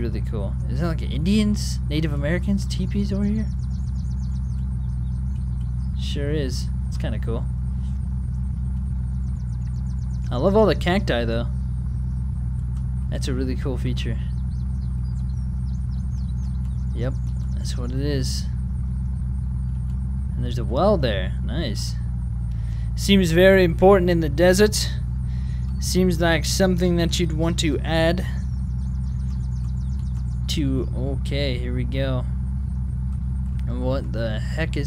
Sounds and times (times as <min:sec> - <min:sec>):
Speech: 0:00.0 - 0:03.6, 0:06.0 - 0:07.5, 0:10.3 - 0:11.5, 0:13.1 - 0:14.3, 0:16.9 - 0:18.6, 0:20.4 - 0:22.0, 0:23.0 - 0:25.0, 0:25.8 - 0:28.4, 0:30.5 - 0:32.3, 0:33.6 - 0:34.8
Outside, rural or natural: 0:00.0 - 0:34.8
Vehicle: 0:00.0 - 0:34.8.